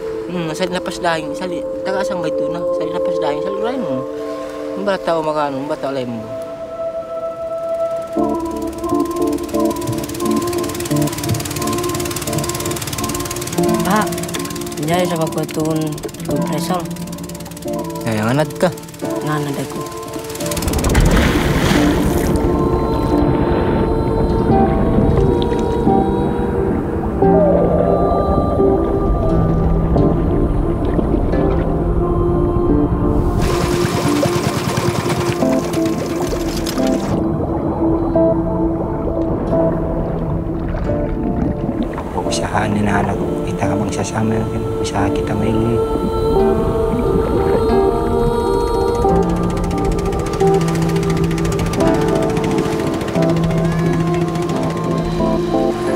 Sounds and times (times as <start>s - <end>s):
Music: 0.0s - 55.9s.